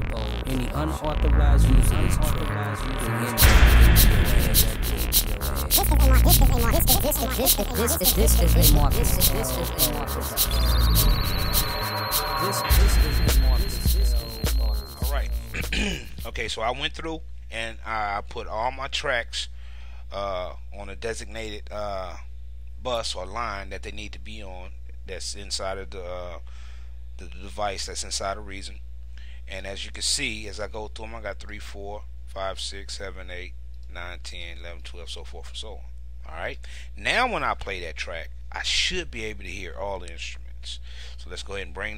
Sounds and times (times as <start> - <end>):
Speech: 0.0 - 4.8, 5.4 - 10.7, 12.4 - 19.5, 20.1 - 26.4, 27.2 - 28.8, 29.5 - 41.9
Music: 0.3 - 16.3.